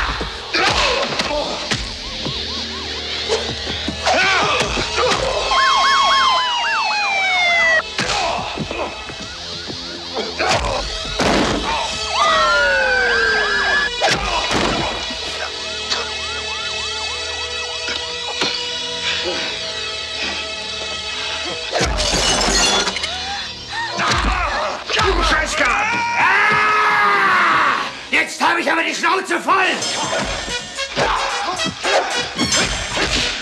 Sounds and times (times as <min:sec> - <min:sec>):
Police car (siren): 0:00.0 - 0:24.0
Ambulance (siren): 0:01.0 - 0:21.7.